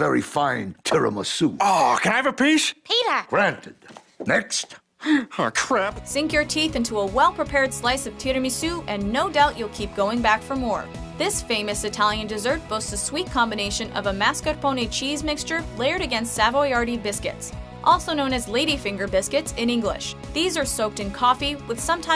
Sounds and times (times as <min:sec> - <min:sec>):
Speech: 0:00.0 - 0:04.8, 0:05.4 - 0:22.1
Music: 0:05.9 - 0:22.1.